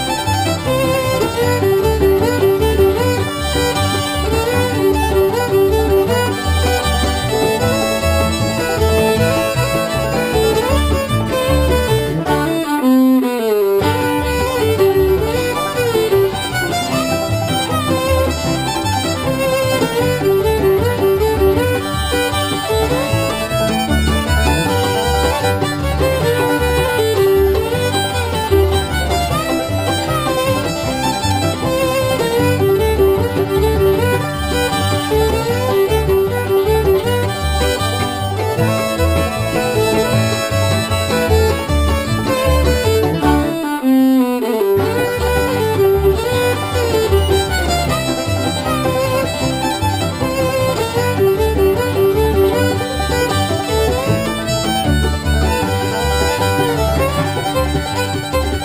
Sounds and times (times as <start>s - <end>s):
Violin, fiddle: 0.0s - 58.6s.